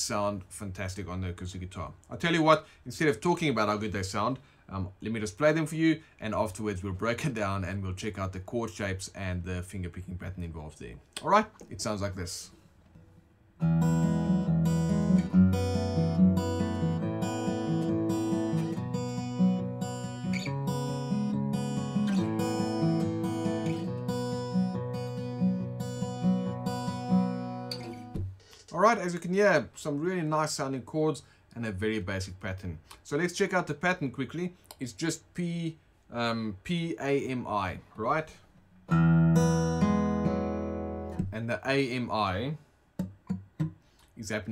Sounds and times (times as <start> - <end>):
Acoustic guitar: 12.6 - 29.0, 38.7 - 41.5, 43.0 - 44.1.